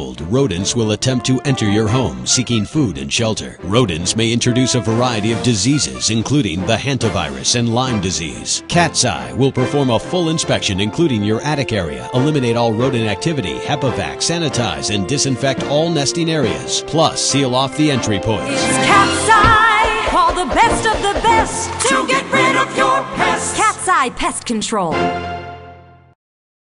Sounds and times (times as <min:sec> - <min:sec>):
Speech: 0:00.0 - 0:18.9, 0:23.6 - 0:25.0
Music: 0:00.0 - 0:26.2.